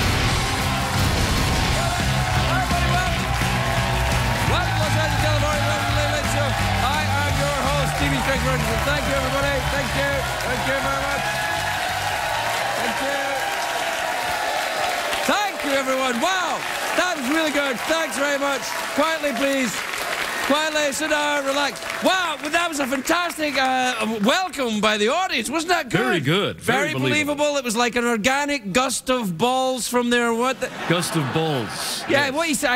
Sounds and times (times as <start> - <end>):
Speech: 4.5 - 11.2, 20.5 - 32.7.